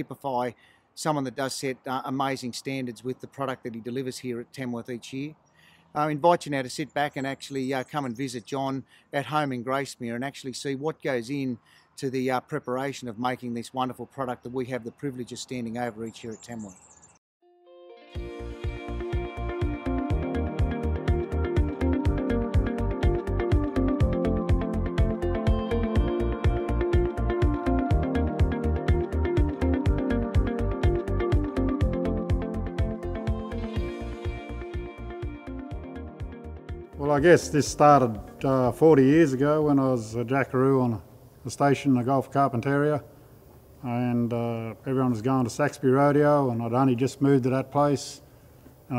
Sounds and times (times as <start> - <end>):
Speech: 0.0 - 5.4, 6.0 - 16.8, 37.0 - 43.1, 43.8 - 48.2
Music: 17.4 - 39.6.